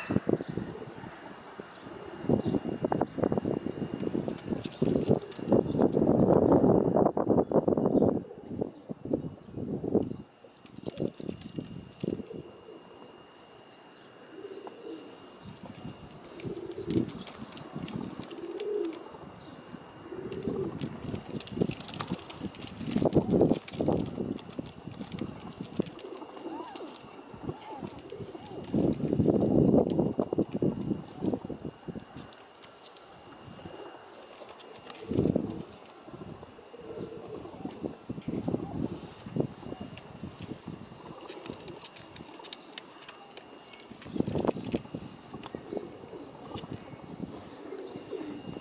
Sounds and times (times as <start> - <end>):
Pigeon, dove: 0.0 - 6.6, 10.1 - 48.6.